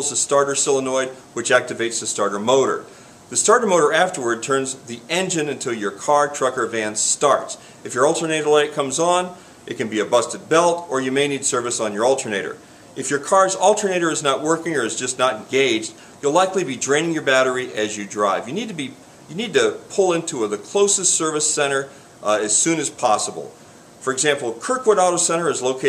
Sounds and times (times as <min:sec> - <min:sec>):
Speech: 0:00.0 - 0:25.8.